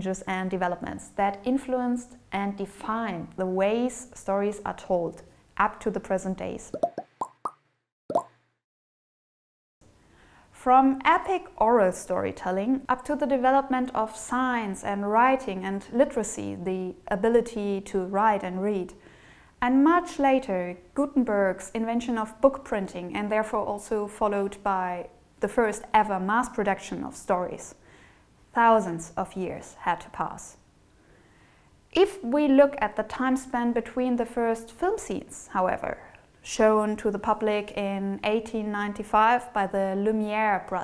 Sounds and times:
Inside, small room: 0.0s - 6.8s, 9.8s - 40.8s
Speech: 0.0s - 6.8s, 10.6s - 19.0s, 19.6s - 27.8s, 28.6s - 30.6s, 32.0s - 40.8s
Plop: 6.8s - 8.4s.

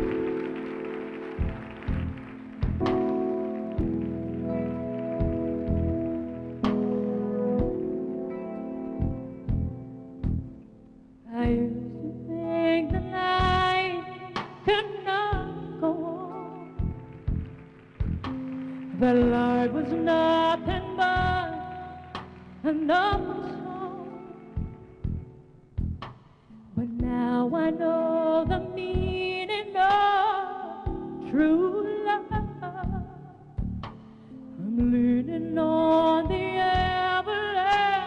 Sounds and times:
Music: 0.0s - 38.0s
Female singing: 11.3s - 16.8s, 18.9s - 22.0s, 22.6s - 24.6s, 26.8s - 33.3s, 34.6s - 38.0s.

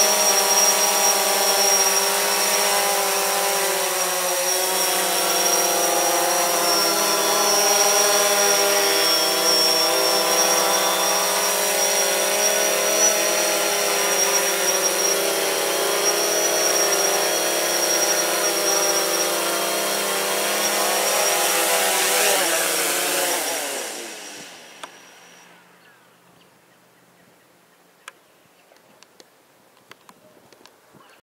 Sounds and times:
Whir: 0.0s - 25.8s.

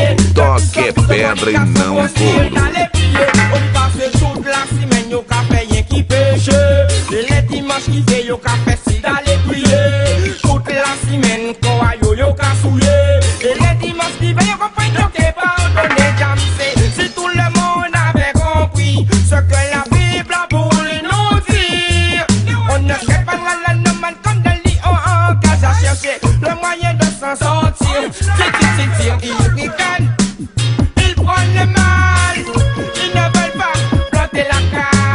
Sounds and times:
Hip hop music: 0.0s - 35.1s
Reggae: 0.0s - 35.1s.

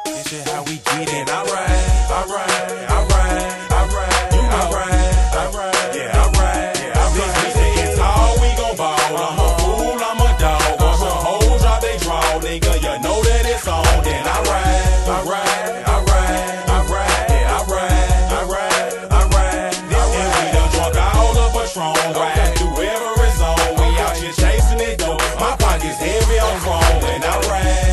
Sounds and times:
Music: 0.0s - 27.9s.

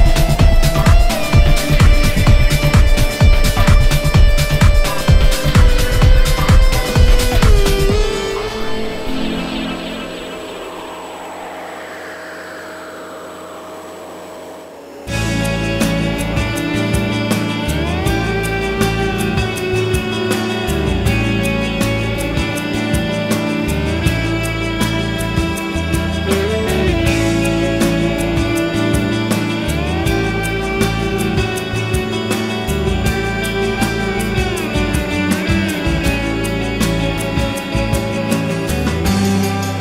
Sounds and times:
Music: 0.0s - 39.8s.

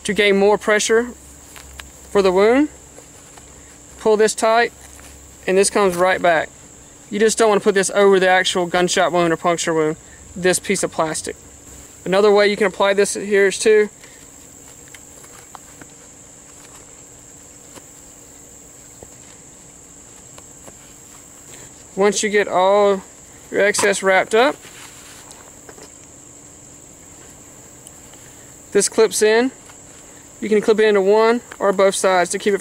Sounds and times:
Speech: 0.0s - 1.2s, 2.1s - 2.8s, 4.0s - 4.8s, 5.4s - 6.5s, 7.1s - 11.4s, 12.0s - 13.9s, 22.0s - 24.6s, 28.7s - 29.6s, 30.4s - 32.6s
Outside, rural or natural: 0.0s - 32.6s.

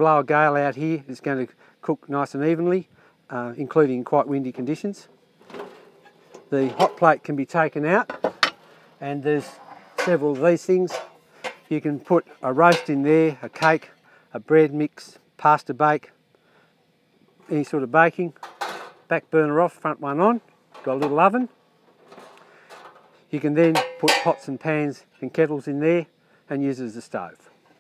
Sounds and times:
Speech: 0.0s - 5.1s, 6.5s - 8.1s, 9.0s - 11.1s, 11.7s - 16.2s, 17.5s - 18.4s, 19.1s - 21.6s, 23.3s - 27.5s.

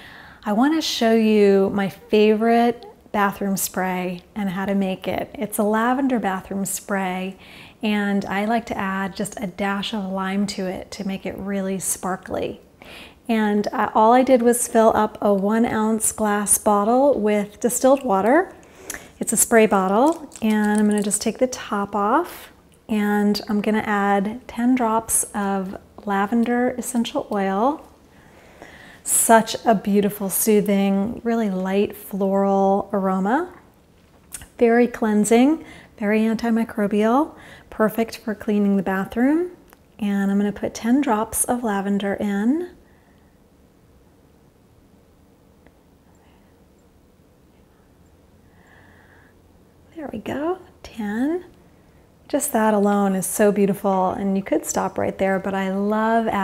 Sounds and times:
Speech: 0.5s - 12.6s, 13.3s - 18.5s, 19.2s - 27.8s, 29.1s - 33.6s, 34.4s - 42.8s, 49.9s - 51.5s, 52.3s - 56.4s.

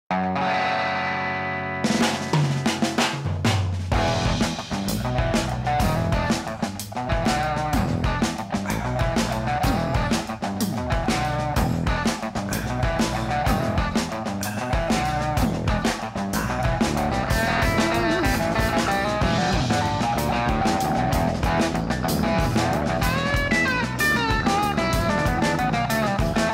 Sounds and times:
Drum kit: 1.8s - 26.5s
Bass drum: 2.0s - 26.5s.

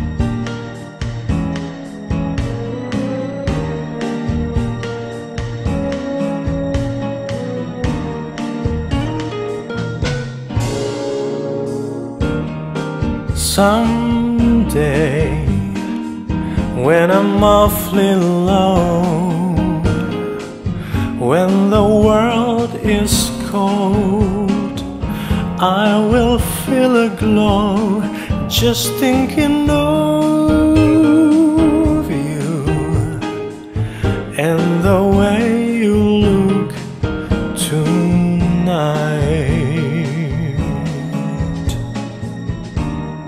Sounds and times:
Jazz: 0.0s - 43.2s.

